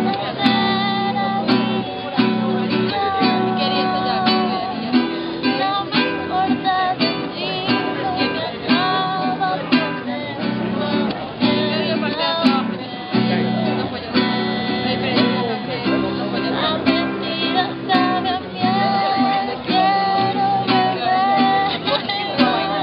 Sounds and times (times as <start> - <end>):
Music: 0.0 - 22.8
Speech: 0.0 - 22.8.